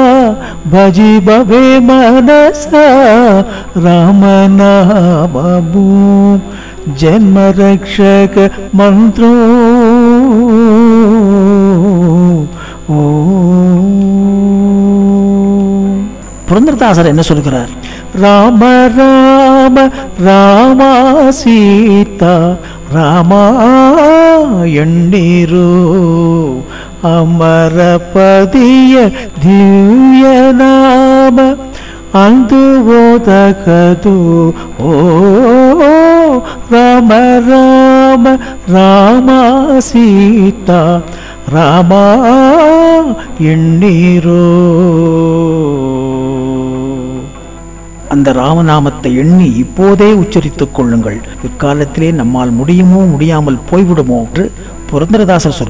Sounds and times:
Mantra: 0:00.0 - 0:55.6.

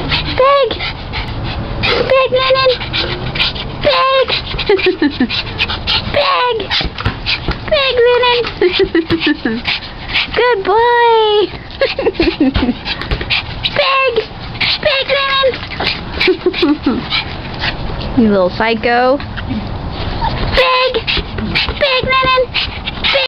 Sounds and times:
Speech: 0:18.2 - 0:19.2.

